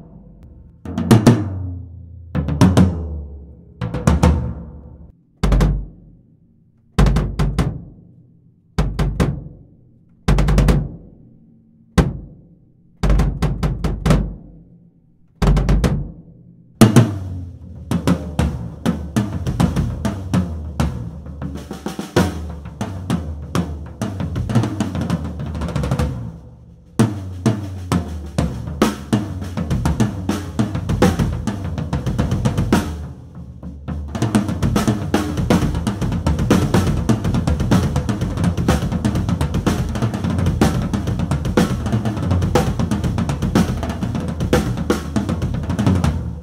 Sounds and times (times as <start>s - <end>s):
Bass drum: 0.0s - 6.2s, 7.0s - 8.0s, 8.8s - 9.6s, 10.3s - 11.2s, 12.0s - 14.6s, 15.4s - 46.4s
Drum kit: 0.0s - 6.2s, 7.0s - 8.0s, 8.8s - 9.6s, 10.3s - 11.1s, 13.0s - 14.5s, 15.4s - 16.2s, 16.8s - 46.4s.